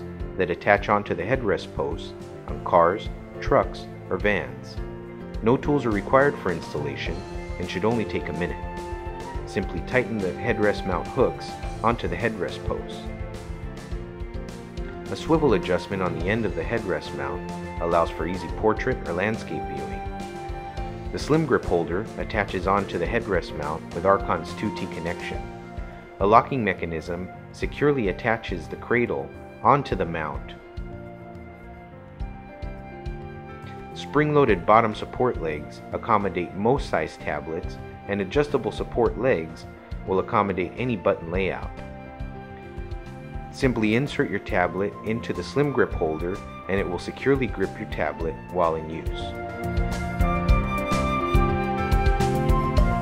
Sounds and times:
Music: 0:00.0 - 0:53.0
Speech: 0:00.4 - 0:04.8, 0:05.4 - 0:08.6, 0:09.5 - 0:13.1, 0:15.1 - 0:20.0, 0:21.1 - 0:25.4, 0:26.2 - 0:30.6, 0:34.0 - 0:41.7, 0:43.5 - 0:49.4.

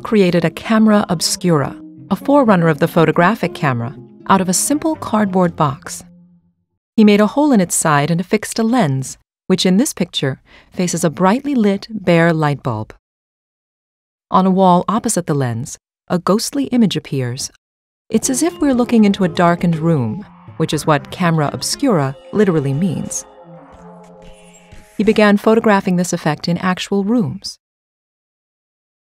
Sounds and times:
Speech: 0:00.0 - 0:06.0, 0:07.0 - 0:13.0, 0:14.3 - 0:23.2, 0:25.0 - 0:27.6
Music: 0:00.0 - 0:06.7, 0:18.1 - 0:26.3.

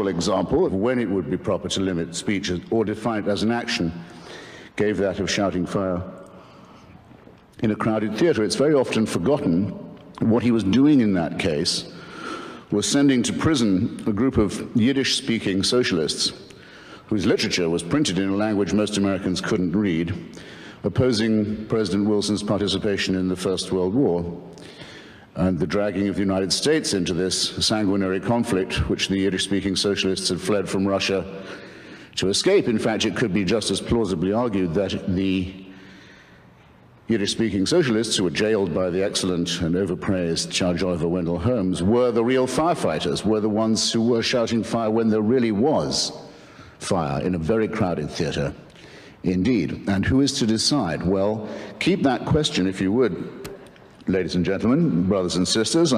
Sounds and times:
Male speech, man speaking: 0:00.0 - 0:04.0, 0:04.8 - 0:06.2, 0:07.6 - 0:11.9, 0:12.7 - 0:16.4, 0:17.1 - 0:24.4, 0:25.4 - 0:31.4, 0:32.2 - 0:35.6, 0:37.1 - 0:46.2, 0:46.8 - 0:48.6, 0:49.2 - 0:53.3, 0:54.1 - 0:55.9
Narration, monologue: 0:00.0 - 0:55.9.

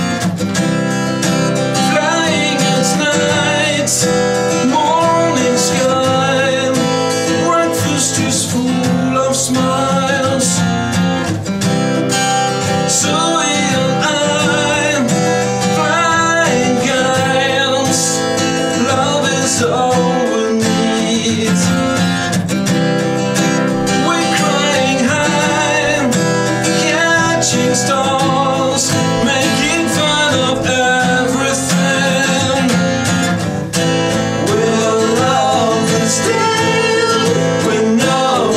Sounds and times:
Music: 0:00.0 - 0:38.5.

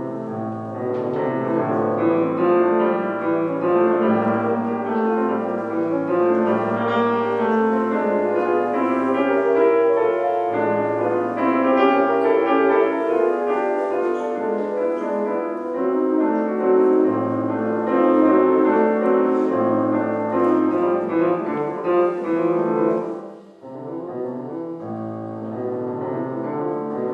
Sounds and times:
Music: 0:00.0 - 0:27.1.

